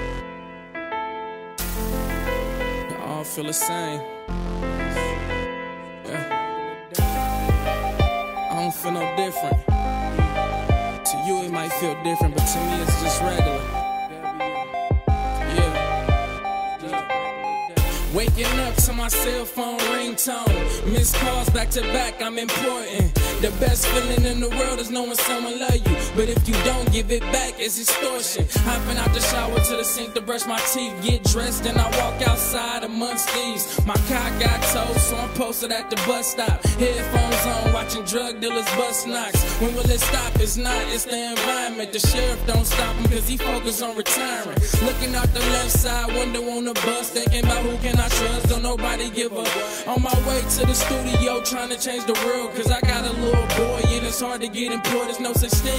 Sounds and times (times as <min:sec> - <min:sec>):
New-age music: 0:00.0 - 0:55.7
Tender music: 0:00.0 - 0:55.7.